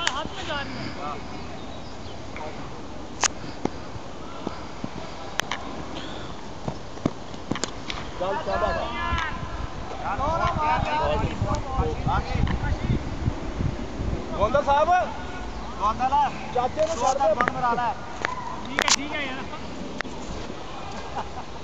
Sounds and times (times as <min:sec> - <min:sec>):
Outside, urban or manmade: 0:00.0 - 0:21.6
Speech: 0:10.0 - 0:13.0.